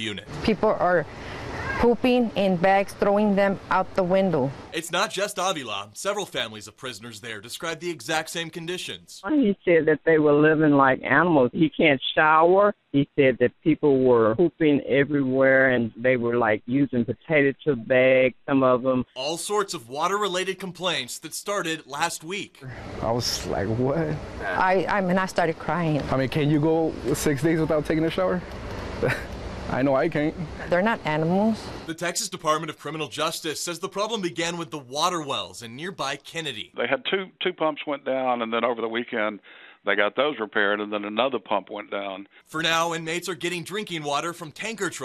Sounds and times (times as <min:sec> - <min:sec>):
Speech: 0:00.0 - 0:01.0, 0:01.7 - 0:28.4, 0:29.7 - 0:45.0.